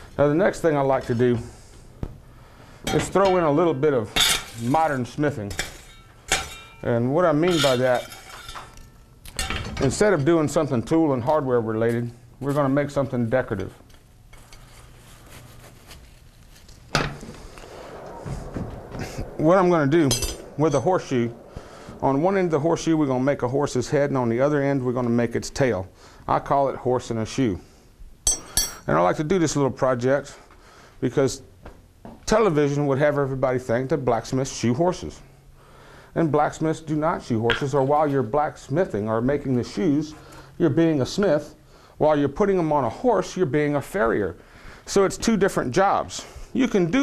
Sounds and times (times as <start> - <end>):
Fire: 0.0 - 10.0, 11.8 - 26.4, 33.9 - 45.2
Speech: 0.2 - 1.6, 2.9 - 5.6, 6.8 - 8.1, 9.8 - 13.8, 19.4 - 21.4, 22.0 - 27.6, 28.9 - 30.4, 31.0 - 31.5, 32.3 - 35.3, 36.2 - 47.0.